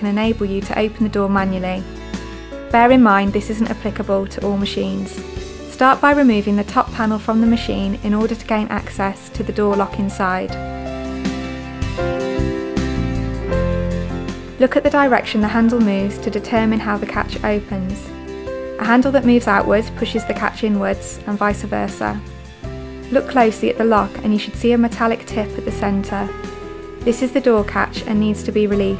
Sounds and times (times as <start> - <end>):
Speech: 0.0 - 1.8, 2.7 - 10.6, 14.6 - 18.1, 18.8 - 22.2, 23.1 - 26.3, 27.1 - 28.9
Music: 0.0 - 28.9.